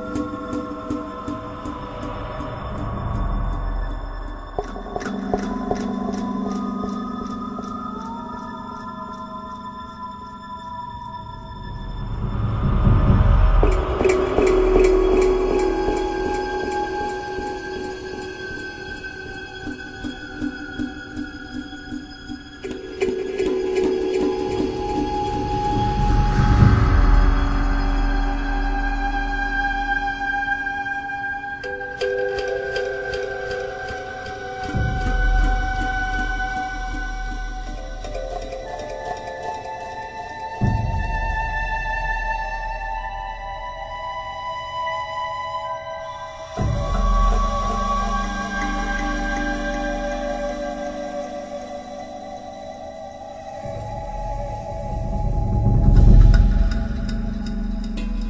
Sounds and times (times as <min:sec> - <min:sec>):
Music: 0:00.0 - 0:58.2.